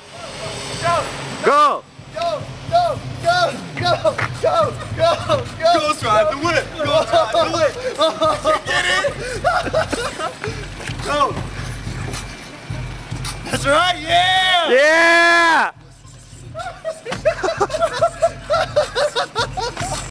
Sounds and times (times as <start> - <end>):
Music: 0.0 - 20.1.